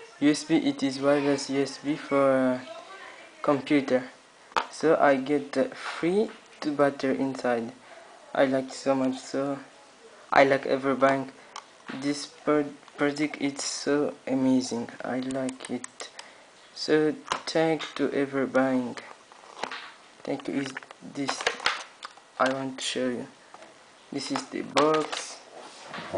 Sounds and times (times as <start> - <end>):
Speech: 0.0 - 16.2, 16.8 - 19.1, 20.2 - 21.6, 22.4 - 23.4, 24.1 - 25.5.